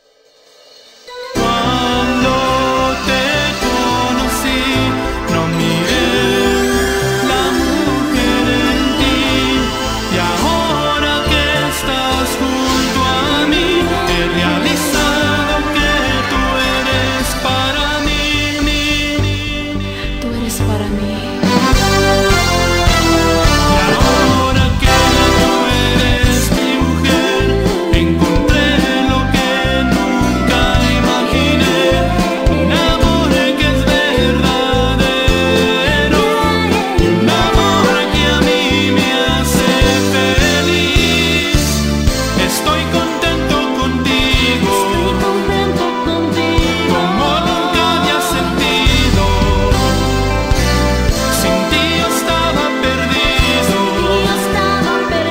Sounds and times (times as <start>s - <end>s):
Music: 0.0s - 55.3s.